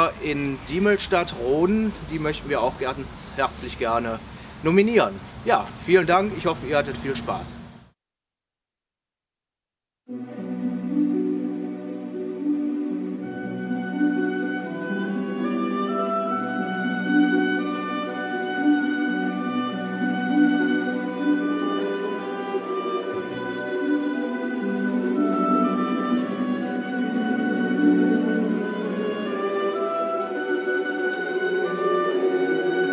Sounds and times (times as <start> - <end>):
Speech: 0.0 - 7.6
Music: 10.1 - 32.9.